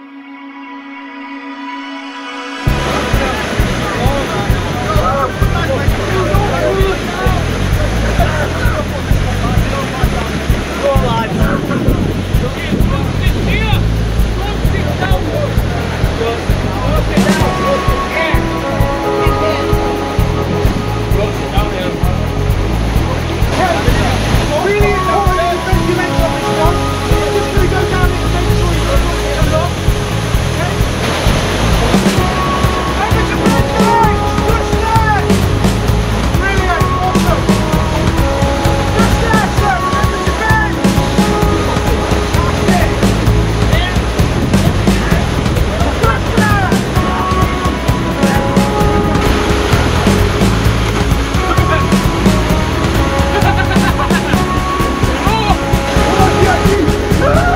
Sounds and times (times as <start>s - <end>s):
Waterfall: 2.1s - 57.5s.